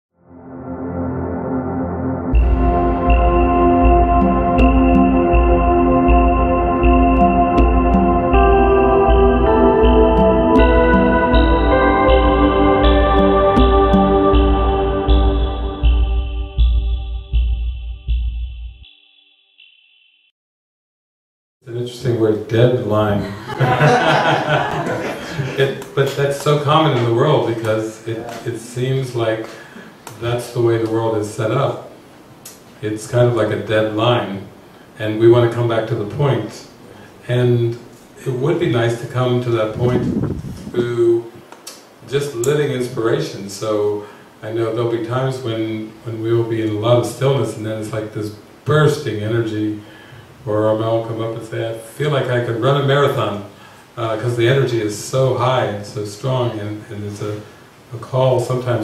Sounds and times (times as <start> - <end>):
Ambient music: 0.1 - 19.2.